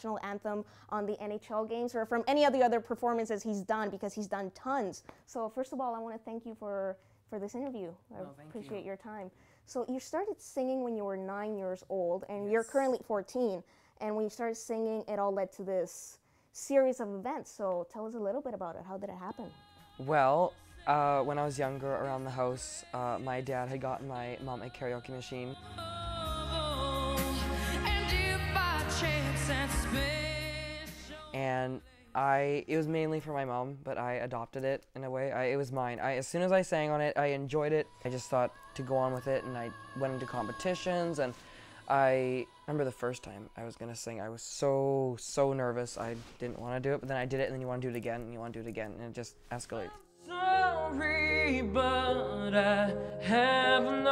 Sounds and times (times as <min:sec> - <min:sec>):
Music: 0:19.0 - 0:32.5, 0:37.6 - 0:44.0, 0:48.6 - 0:54.1
Male singing: 0:19.4 - 0:32.4, 0:37.5 - 0:43.9, 0:49.7 - 0:54.1.